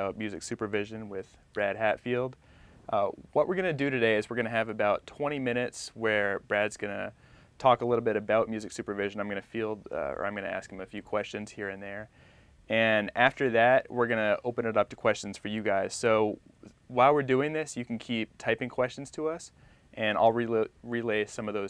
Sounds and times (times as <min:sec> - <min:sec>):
Speech: 0:00.0 - 0:12.1, 0:12.7 - 0:21.7.